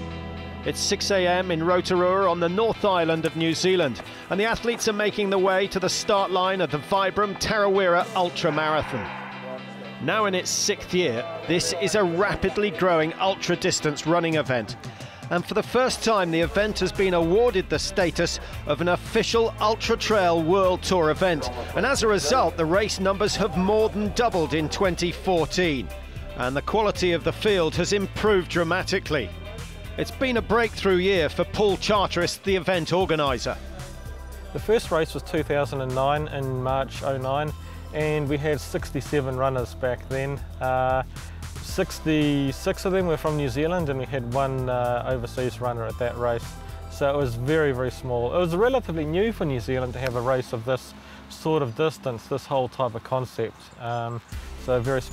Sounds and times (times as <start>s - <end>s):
Music: 0.0s - 55.1s
Speech: 0.6s - 9.1s, 10.0s - 33.6s, 34.5s - 55.1s.